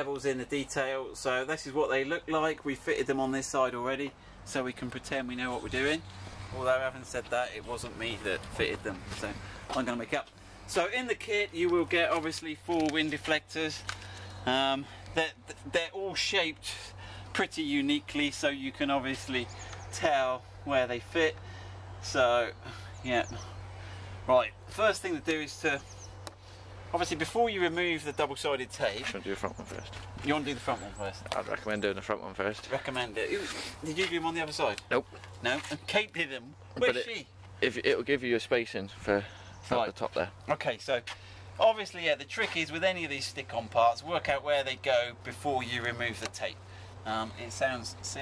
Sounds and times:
Speech: 0:00.0 - 0:13.8, 0:14.4 - 0:21.4, 0:22.0 - 0:23.4, 0:24.3 - 0:25.9, 0:26.9 - 0:48.2.

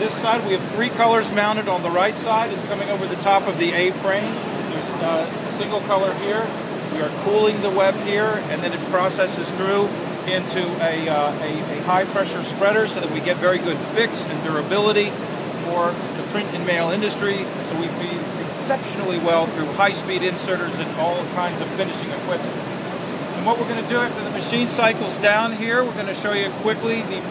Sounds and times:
Speech: 0:00.0 - 0:22.5, 0:23.4 - 0:27.3.

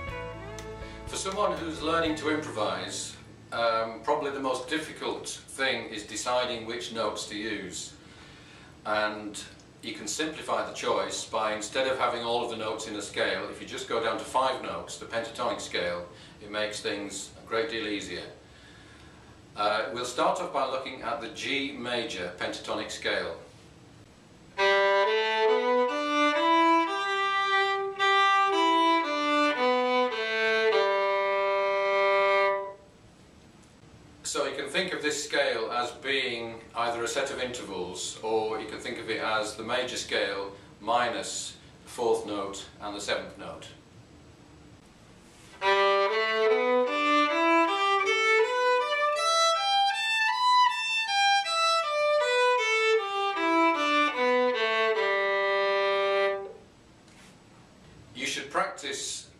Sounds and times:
Speech: 0:01.1 - 0:08.0, 0:08.8 - 0:18.4, 0:19.6 - 0:23.5, 0:34.2 - 0:43.8, 0:58.2 - 0:59.3.

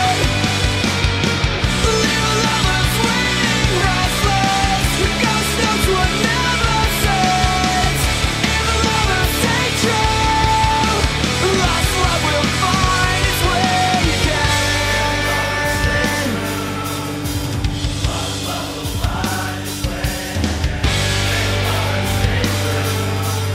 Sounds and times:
Music: 0:00.0 - 0:23.5.

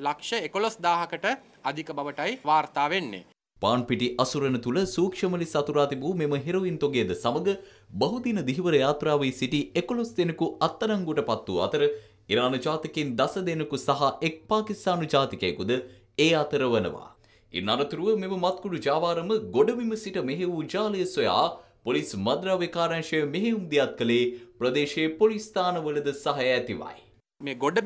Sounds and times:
Speech: 0:00.0 - 0:27.8.

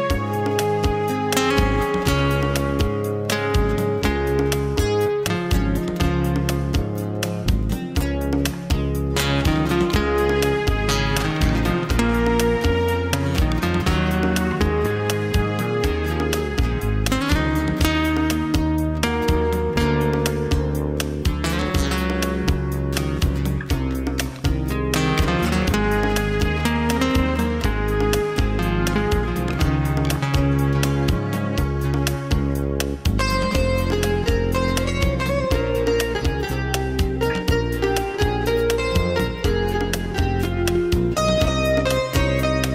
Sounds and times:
Music: 0:00.0 - 0:42.7.

